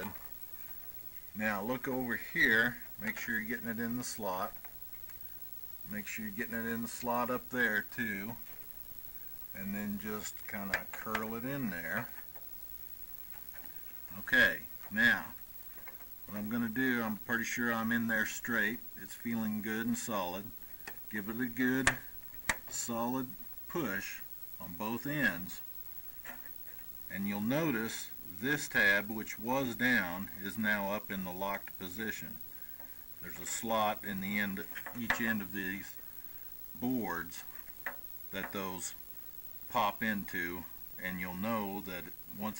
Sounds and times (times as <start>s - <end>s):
Speech: 0.0s - 0.2s, 1.4s - 4.6s, 5.8s - 8.5s, 9.5s - 12.2s, 14.1s - 15.4s, 16.3s - 22.1s, 22.7s - 25.7s, 27.1s - 32.4s, 33.2s - 36.0s, 36.8s - 37.5s, 38.3s - 39.0s, 39.7s - 42.5s
Inside, small room: 0.0s - 42.5s.